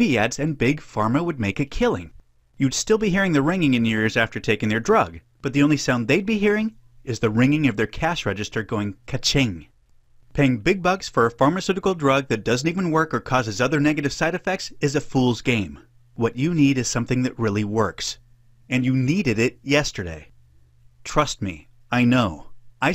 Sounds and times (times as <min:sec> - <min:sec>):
Speech: 0:00.0 - 0:09.7, 0:10.3 - 0:20.3, 0:21.0 - 0:22.9.